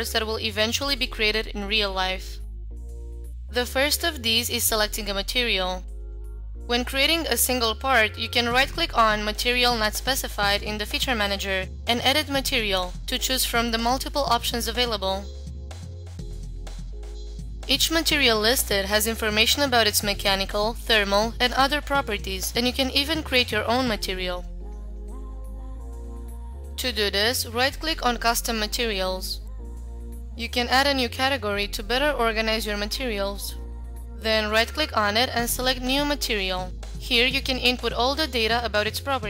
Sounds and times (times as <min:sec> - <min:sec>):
Speech: 0:00.0 - 0:02.4, 0:03.6 - 0:05.9, 0:06.7 - 0:15.3, 0:17.7 - 0:24.5, 0:26.8 - 0:29.5, 0:30.4 - 0:33.6, 0:34.2 - 0:39.2
Music: 0:00.0 - 0:39.2.